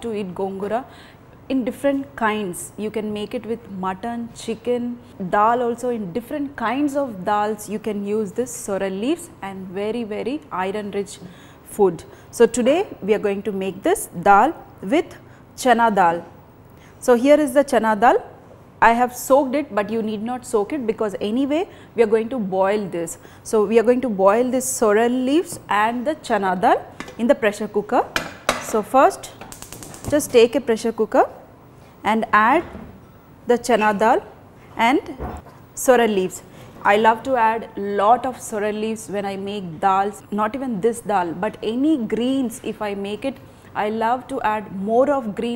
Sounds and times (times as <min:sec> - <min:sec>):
Speech: 0:01.5 - 0:16.3, 0:17.0 - 0:29.3, 0:30.1 - 0:31.4, 0:32.1 - 0:32.7, 0:33.5 - 0:35.2, 0:35.8 - 0:45.5.